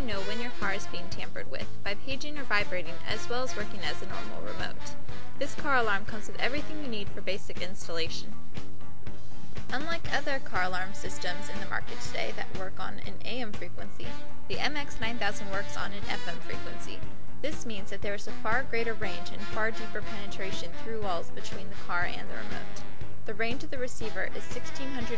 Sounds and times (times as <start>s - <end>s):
Speech: 0.0s - 8.3s, 9.7s - 25.1s
Music: 0.0s - 25.1s.